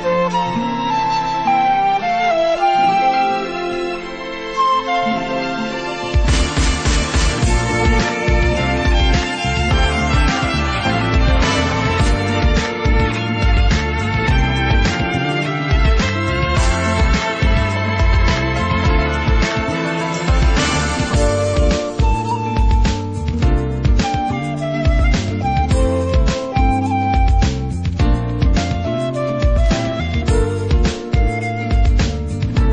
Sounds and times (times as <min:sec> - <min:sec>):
Music: 0:00.0 - 0:32.7.